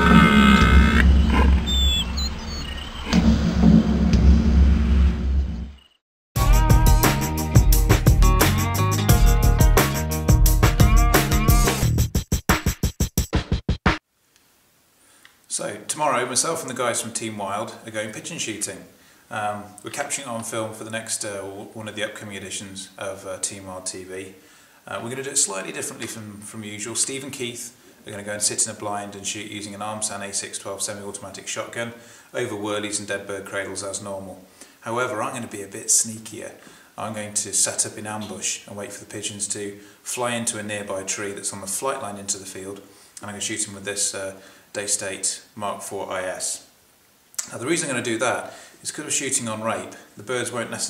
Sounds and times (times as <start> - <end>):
Drum machine: 6.4 - 14.0.